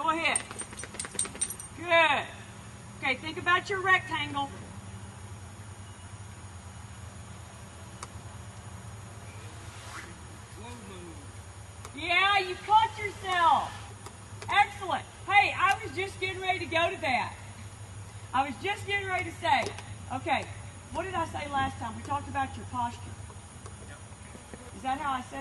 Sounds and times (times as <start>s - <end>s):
Outside, rural or natural: 0.0s - 25.4s.